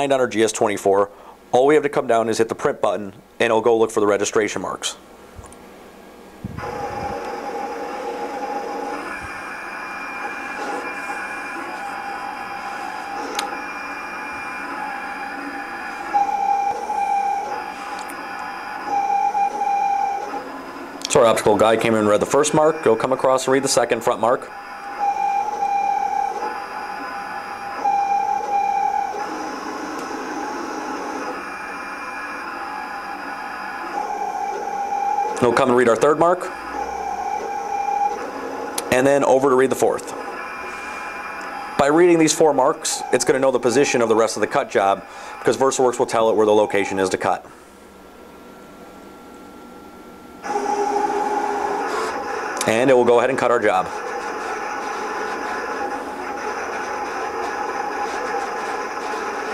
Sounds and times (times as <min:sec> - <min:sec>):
Speech: 0:00.0 - 0:05.0, 0:21.1 - 0:24.5, 0:35.4 - 0:36.5, 0:38.9 - 0:40.1, 0:41.8 - 0:47.5, 0:52.6 - 0:53.9
Printer: 0:06.4 - 0:59.5.